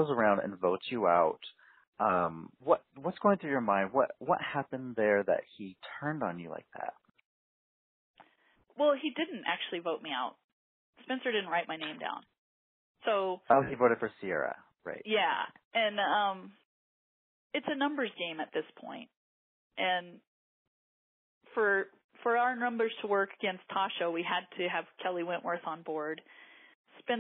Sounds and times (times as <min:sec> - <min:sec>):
Speech: 0:00.0 - 0:06.9, 0:08.8 - 0:10.3, 0:11.1 - 0:12.2, 0:13.1 - 0:16.5, 0:17.6 - 0:19.1, 0:19.8 - 0:20.2, 0:21.6 - 0:26.2.